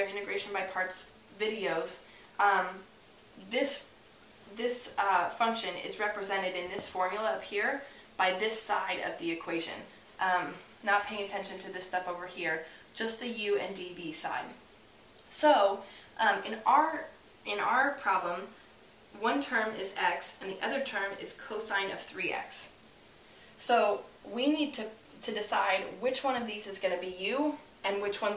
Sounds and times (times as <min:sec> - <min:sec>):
Speech: 0:00.0 - 0:03.9, 0:04.5 - 0:14.6, 0:15.2 - 0:18.6, 0:19.2 - 0:22.8, 0:23.6 - 0:28.3
Inside, small room: 0:00.0 - 0:28.3.